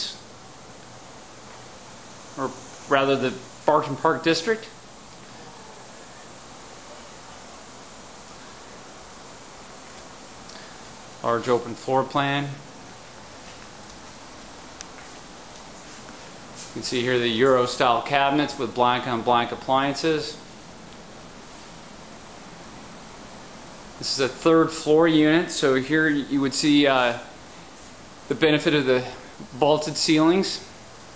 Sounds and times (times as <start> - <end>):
Speech: 0.0 - 0.2, 2.4 - 4.8, 11.2 - 12.7, 16.7 - 20.4, 24.0 - 27.4, 28.3 - 30.8.